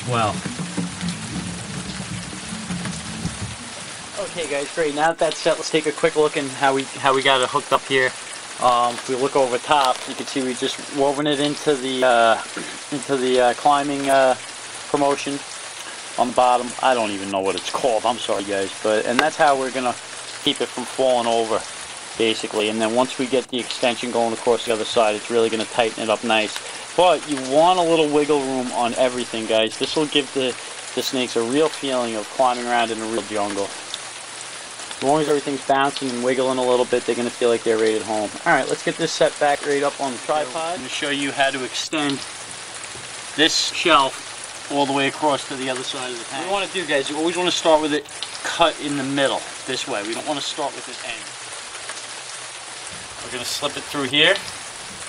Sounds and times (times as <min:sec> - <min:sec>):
Speech: 0:00.0 - 0:00.4, 0:04.2 - 0:15.4, 0:16.2 - 0:21.6, 0:22.2 - 0:33.8, 0:35.0 - 0:42.2, 0:43.4 - 0:51.3, 0:53.2 - 0:54.5
Liquid: 0:00.0 - 0:55.0.